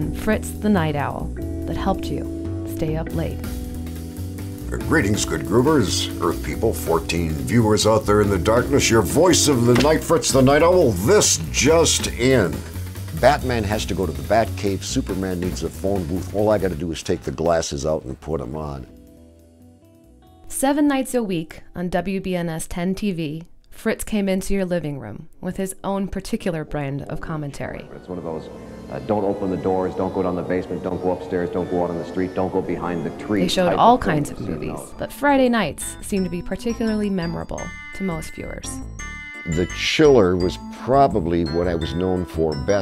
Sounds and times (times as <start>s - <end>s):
Music: 0.0s - 42.8s
Speech: 0.2s - 3.4s, 4.8s - 18.9s, 20.6s - 38.8s, 39.5s - 42.8s.